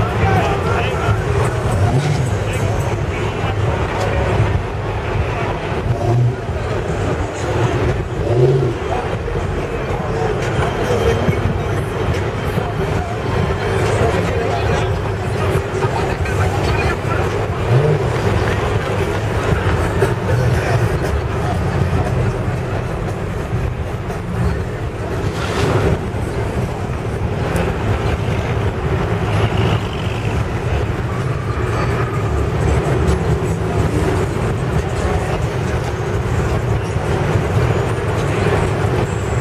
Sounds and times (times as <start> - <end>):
Car: 0.0 - 39.4.